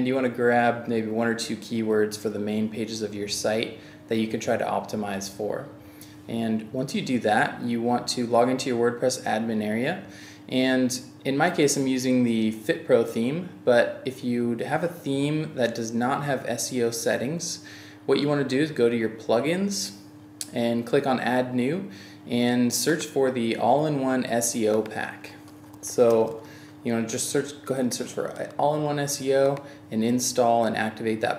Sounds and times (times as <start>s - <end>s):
Speech: 0.0s - 31.3s.